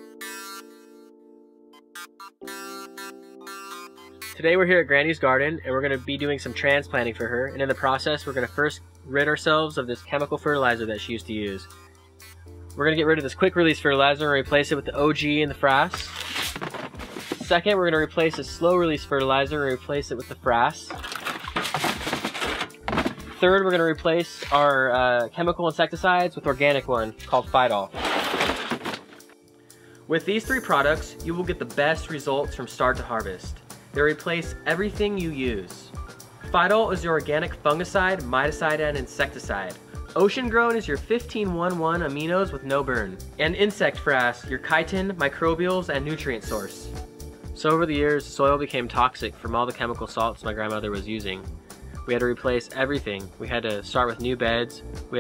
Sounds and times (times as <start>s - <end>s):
Music: 0.0s - 55.2s
Speech: 4.4s - 11.7s, 12.8s - 16.2s, 17.4s - 21.0s, 23.4s - 28.0s, 30.1s - 46.9s, 47.6s - 51.5s, 52.1s - 55.2s.